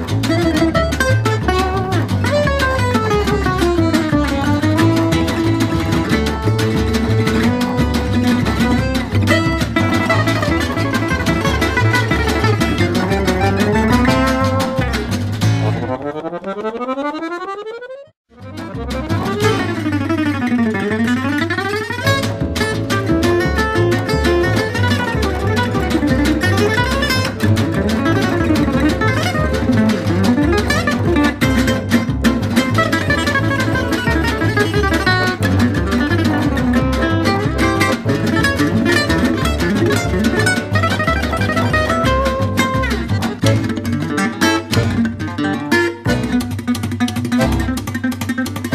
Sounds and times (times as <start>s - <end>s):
Acoustic guitar: 0.0s - 17.0s, 18.3s - 48.7s
Flamenco: 0.0s - 48.7s.